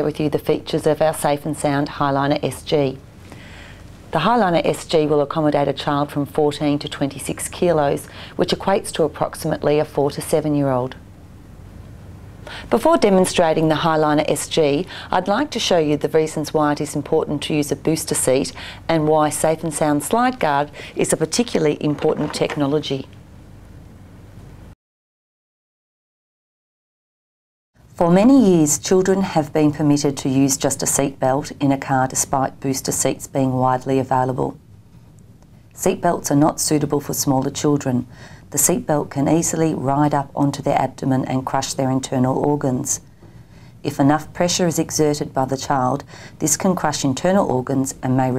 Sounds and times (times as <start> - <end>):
Speech: 0.0 - 3.0, 4.1 - 11.0, 12.7 - 23.2, 28.0 - 34.6, 35.8 - 43.0, 43.8 - 48.3.